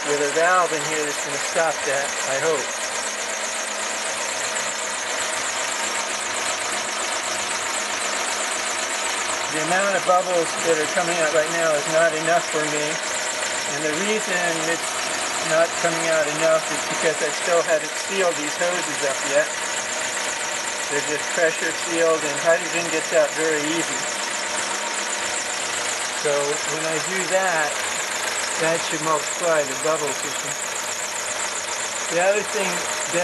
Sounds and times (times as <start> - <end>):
Engine: 0.0 - 33.2
Speech: 0.1 - 2.7, 9.5 - 13.0, 13.7 - 14.8, 15.4 - 19.5, 20.9 - 24.0, 26.2 - 27.8, 28.6 - 30.6, 32.1 - 33.2.